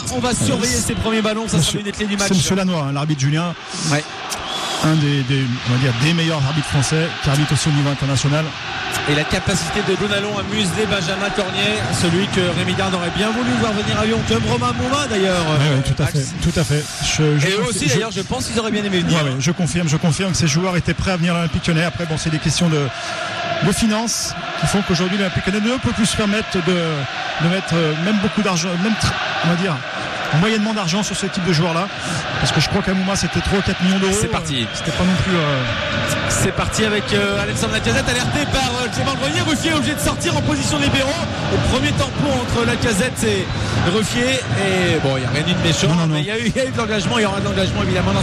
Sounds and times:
Speech: 0.0s - 4.1s, 4.8s - 23.0s, 23.6s - 48.2s.

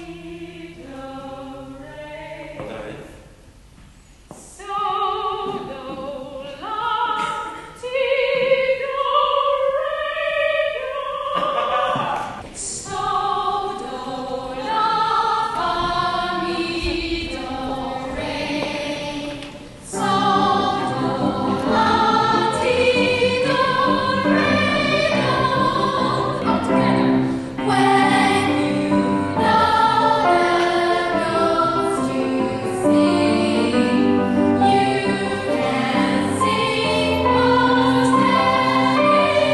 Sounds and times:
Music: 4.6s - 11.5s, 12.6s - 39.5s.

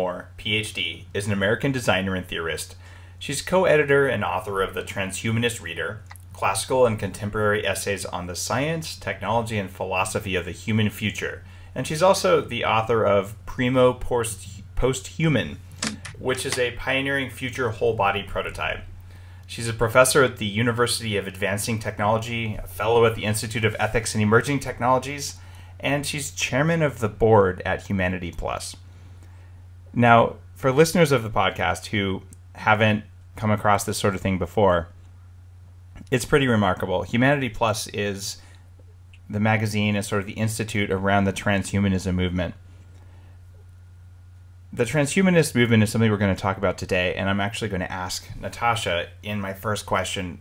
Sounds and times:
Speech: 0.0s - 18.9s, 19.5s - 28.8s, 29.9s - 35.0s, 36.0s - 38.4s, 39.3s - 42.6s, 44.7s - 50.4s.

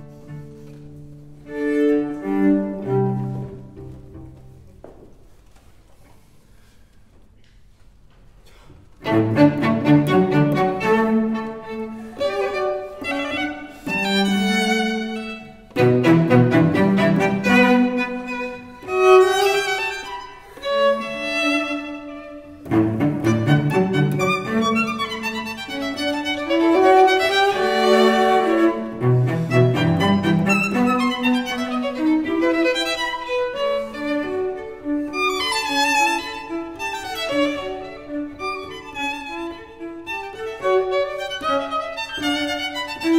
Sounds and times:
Pizzicato: 0.0s - 4.9s, 9.0s - 43.1s.

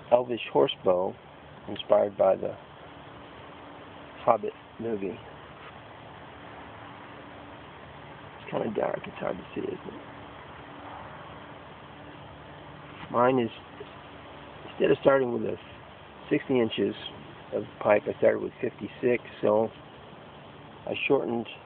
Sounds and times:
Speech: 0.1s - 2.6s, 4.2s - 5.2s, 8.4s - 10.0s, 13.1s - 13.7s, 14.7s - 15.7s, 16.3s - 19.7s, 20.9s - 21.6s.

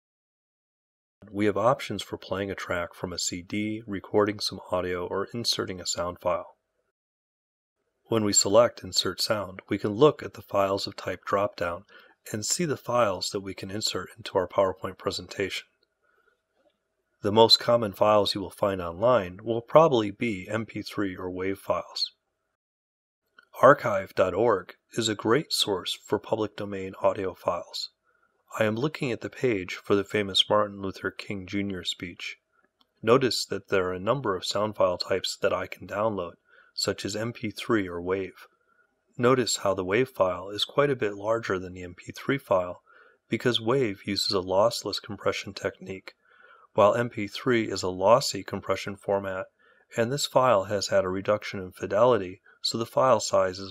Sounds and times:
Speech: 1.2s - 6.6s, 8.1s - 15.7s, 17.3s - 22.2s, 23.6s - 32.4s, 33.0s - 38.5s, 39.2s - 46.2s, 46.8s - 53.7s.

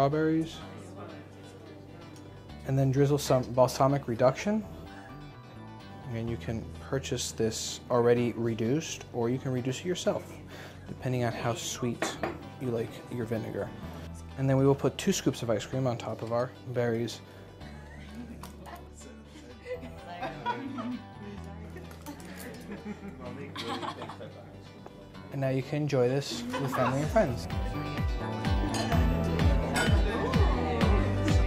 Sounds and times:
Music: 0.0s - 31.4s.

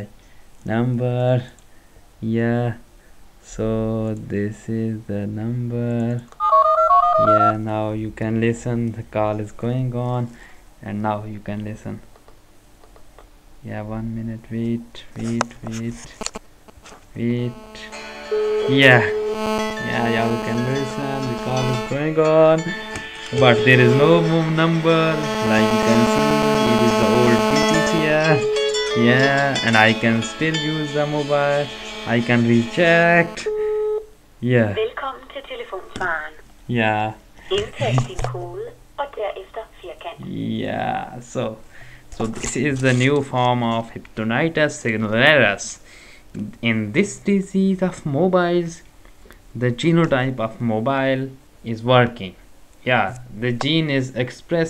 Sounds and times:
Speech: 0.7s - 1.6s, 2.2s - 2.8s, 3.5s - 6.3s, 7.2s - 12.0s, 13.6s - 16.2s, 17.2s - 18.0s, 18.7s - 19.2s, 19.8s - 22.7s, 23.4s - 33.5s, 34.4s - 41.6s, 42.2s - 45.8s, 46.4s - 48.8s, 49.6s - 54.6s
Music: 17.6s - 33.5s.

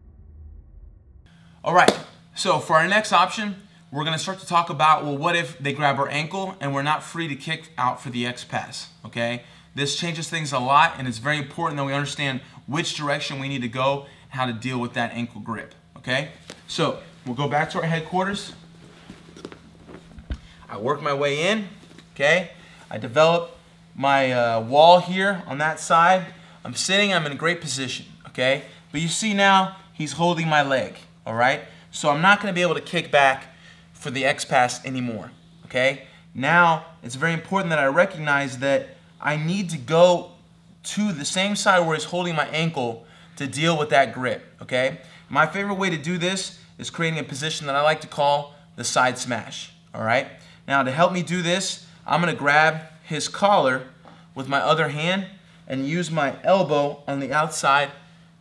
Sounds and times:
Speech: 1.7s - 18.6s, 20.7s - 58.0s.

